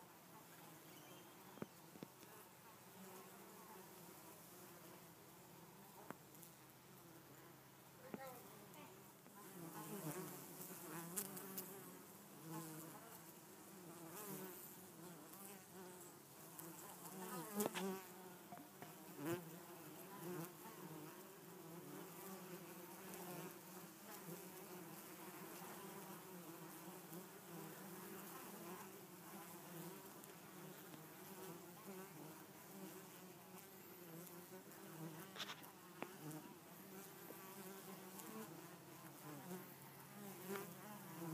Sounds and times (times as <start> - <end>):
Bee, wasp, etc.: 0.0 - 41.3.